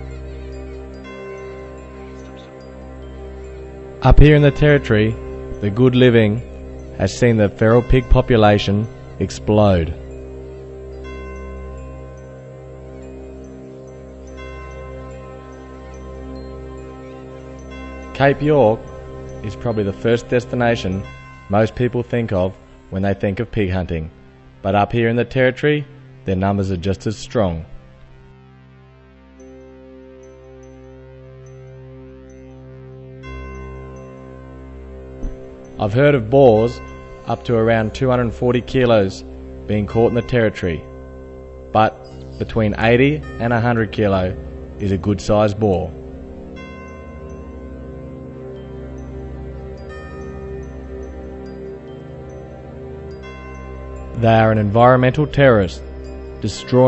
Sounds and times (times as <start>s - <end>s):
Music: 0.0s - 56.8s
Speech: 4.0s - 10.0s, 18.2s - 18.8s, 19.5s - 24.1s, 24.7s - 27.8s, 35.8s - 40.9s, 41.8s - 46.0s, 54.2s - 55.8s, 56.4s - 56.8s.